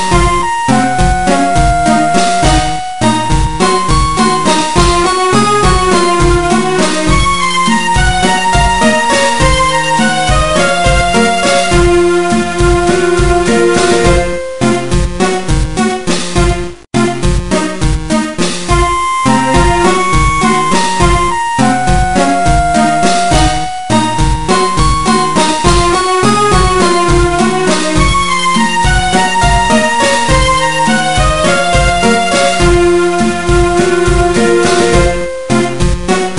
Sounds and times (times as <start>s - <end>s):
Video game music: 0.0s - 36.3s.